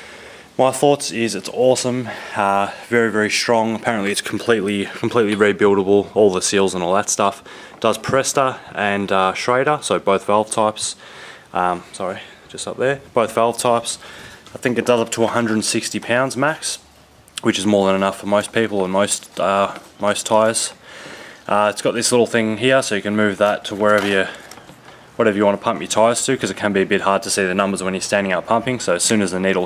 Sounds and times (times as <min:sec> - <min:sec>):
Speech: 0:00.6 - 0:16.8, 0:17.4 - 0:20.8, 0:21.5 - 0:24.4, 0:25.2 - 0:29.6.